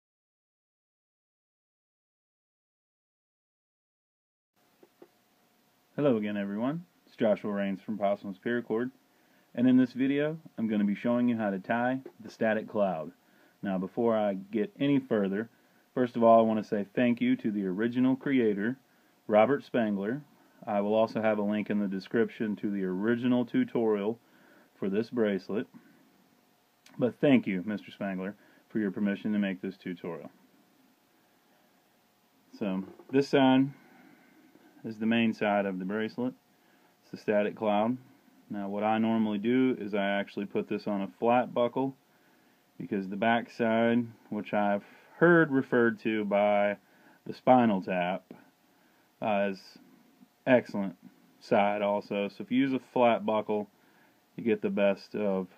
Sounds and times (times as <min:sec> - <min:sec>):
Speech: 0:06.0 - 0:09.0, 0:09.6 - 0:24.2, 0:24.8 - 0:25.8, 0:26.9 - 0:30.4, 0:32.5 - 0:33.8, 0:34.8 - 0:36.4, 0:37.0 - 0:42.0, 0:42.8 - 0:48.5, 0:49.2 - 0:49.8, 0:50.4 - 0:53.7, 0:54.4 - 0:55.5.